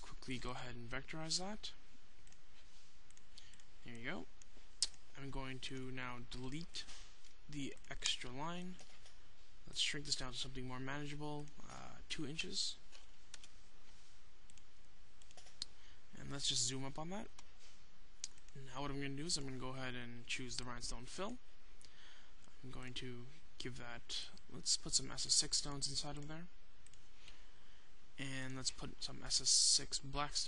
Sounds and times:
Speech: 0.0 - 1.8, 3.8 - 4.3, 5.1 - 6.9, 7.5 - 8.8, 9.7 - 12.8, 16.1 - 17.4, 18.5 - 21.4, 22.6 - 26.5, 28.2 - 30.4.

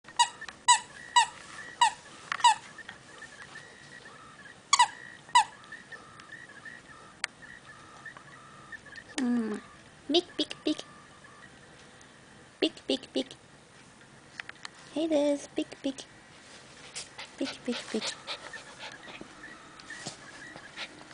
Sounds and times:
Squeak: 0.1 - 2.8, 4.7 - 5.6
Speech: 9.2 - 10.9, 12.6 - 13.4, 14.9 - 16.1, 17.4 - 18.2.

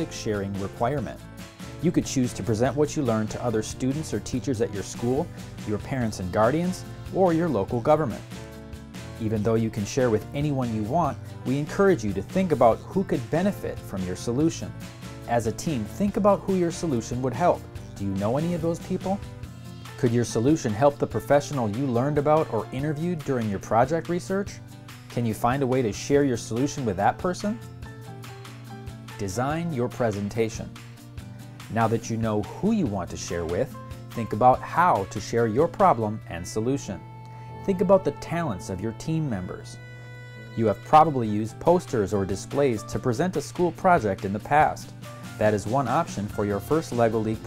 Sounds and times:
Speech: 0.0 - 1.2, 1.8 - 8.3, 9.2 - 19.2, 20.0 - 27.6, 29.2 - 30.7, 31.7 - 37.0, 37.6 - 39.8, 40.6 - 47.4
Music: 0.0 - 47.4.

